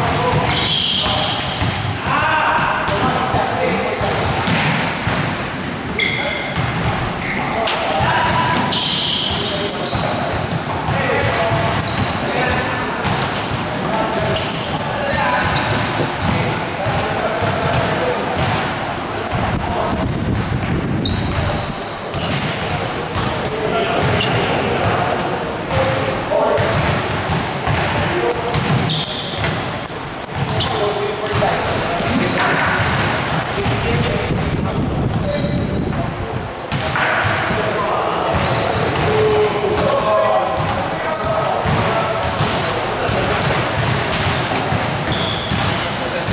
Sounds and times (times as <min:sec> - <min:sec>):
Speech: 0:00.0 - 0:01.4, 0:02.0 - 0:04.7, 0:05.9 - 0:20.2, 0:21.2 - 0:27.1, 0:27.7 - 0:28.9, 0:30.4 - 0:43.8, 0:45.5 - 0:46.3.